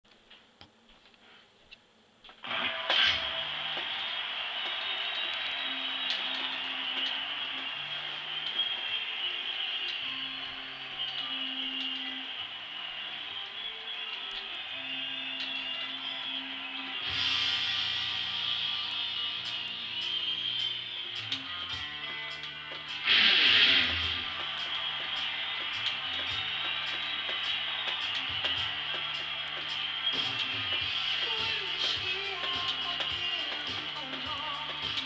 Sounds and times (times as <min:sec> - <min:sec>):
Music: 0:02.4 - 0:35.0.